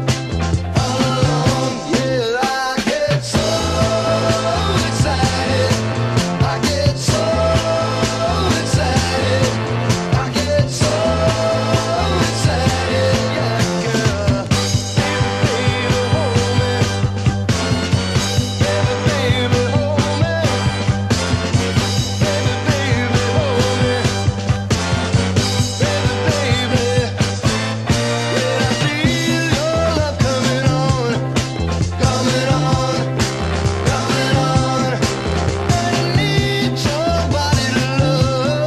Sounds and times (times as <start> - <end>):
Independent music: 0.0 - 38.6
Psychedelic rock: 0.0 - 38.6
Song: 0.0 - 38.6.